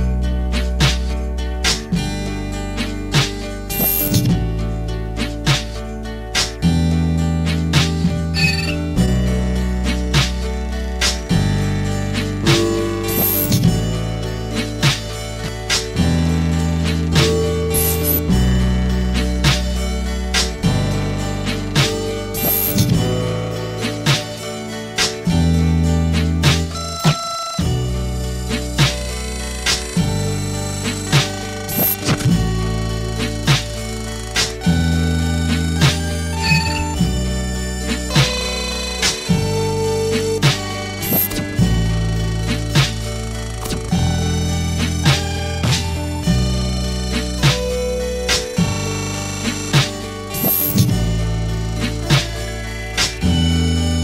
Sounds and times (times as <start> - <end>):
Music: 0.0 - 54.0.